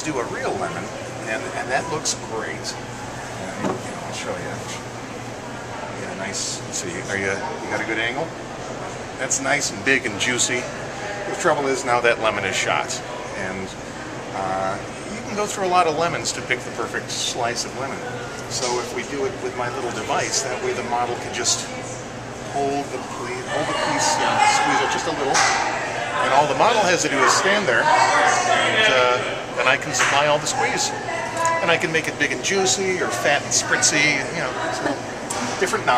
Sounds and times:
Speech: 0.0 - 2.8, 9.2 - 13.8, 14.4 - 21.8, 22.5 - 35.9.

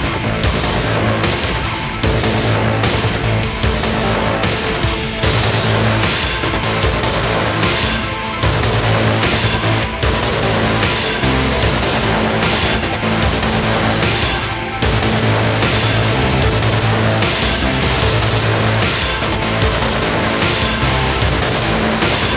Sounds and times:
Angry music: 0.0 - 22.3.

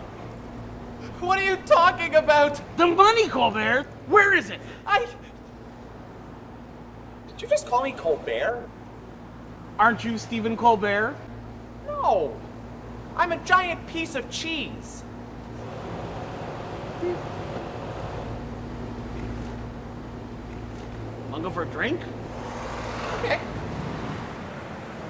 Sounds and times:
Speech: 1.2 - 5.2, 7.3 - 8.7, 13.2 - 15.1, 21.3 - 22.1.

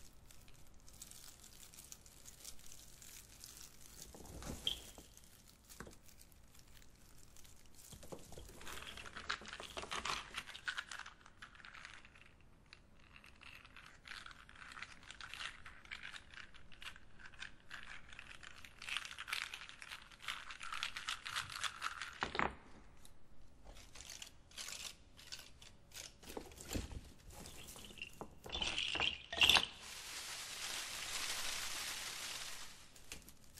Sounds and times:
Crumpling, crinkling: 0.0 - 33.5.

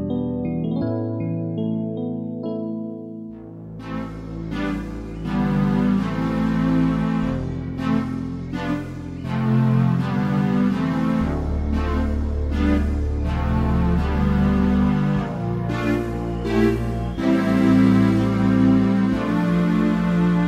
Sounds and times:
Music: 0.0 - 20.4.

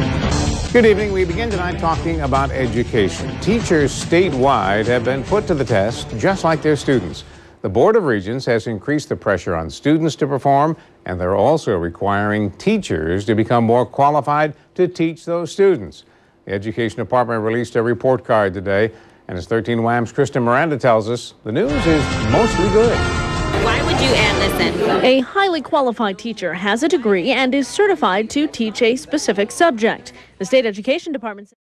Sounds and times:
Music: 0.0 - 7.3, 21.6 - 25.0.

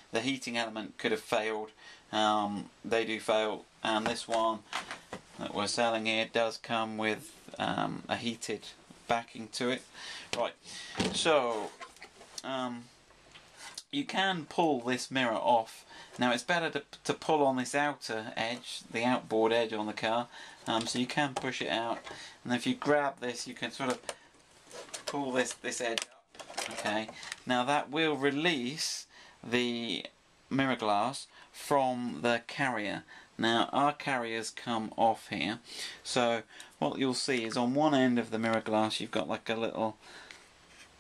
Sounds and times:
Speech: 0.1 - 4.6, 5.4 - 11.8, 12.4 - 13.0, 13.8 - 24.1, 25.0 - 40.0.

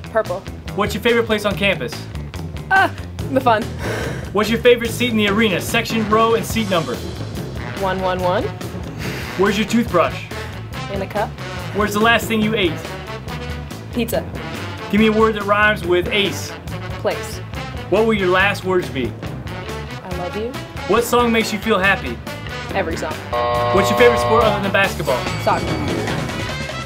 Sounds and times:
Music: 0.0 - 26.8
Speech: 4.4 - 7.0, 9.4 - 10.2, 10.9 - 12.8, 14.9 - 19.1, 20.1 - 23.2, 23.8 - 26.2.

